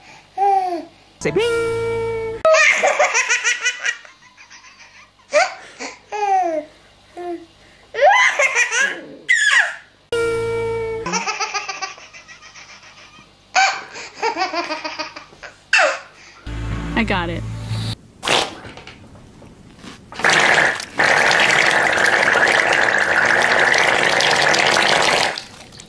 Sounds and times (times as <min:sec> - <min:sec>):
Music: 0:16.5 - 0:18.0
Speech: 0:17.0 - 0:17.4.